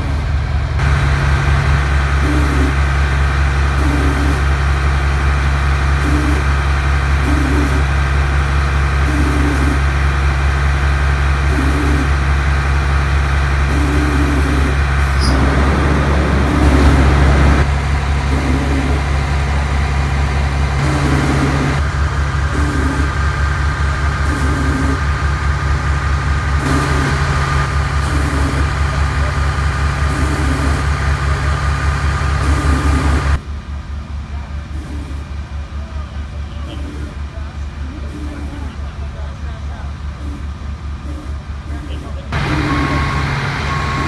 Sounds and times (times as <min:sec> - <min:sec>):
Vehicle: 0:00.0 - 0:44.0.